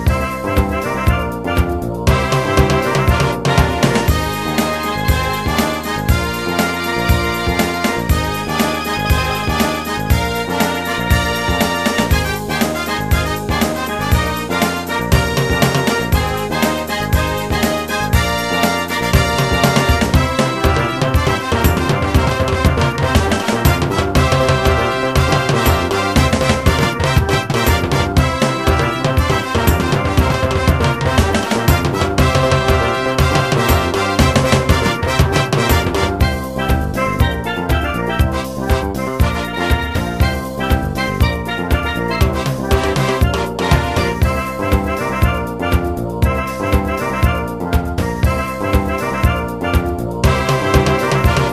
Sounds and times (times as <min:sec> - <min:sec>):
Music: 0:00.0 - 0:51.5.